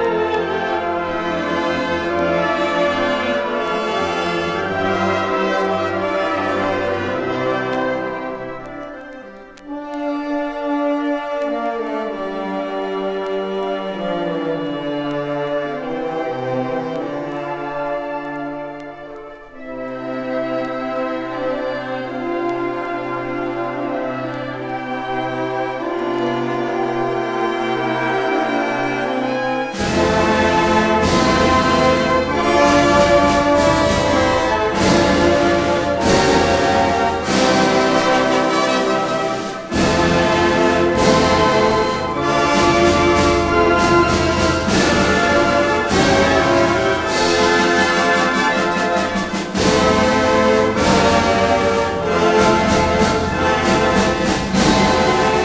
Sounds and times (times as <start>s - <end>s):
Classical music: 0.0s - 55.4s
Orchestra: 0.0s - 55.4s.